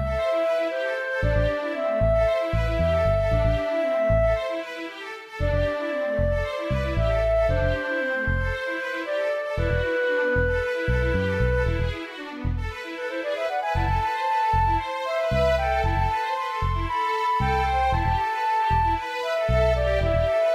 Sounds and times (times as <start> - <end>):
Music: 0.0 - 20.5.